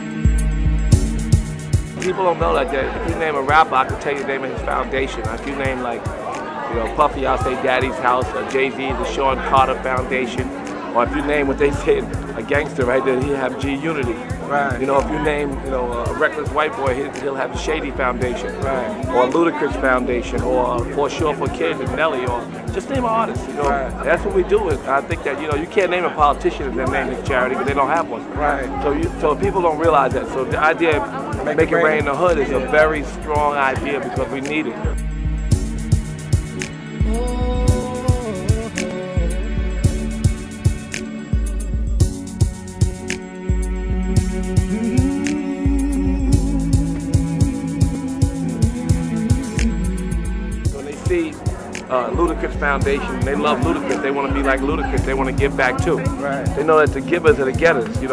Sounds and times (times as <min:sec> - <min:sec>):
Music: 0:00.0 - 0:58.1
Speech: 0:02.0 - 0:35.0, 0:50.7 - 0:58.1.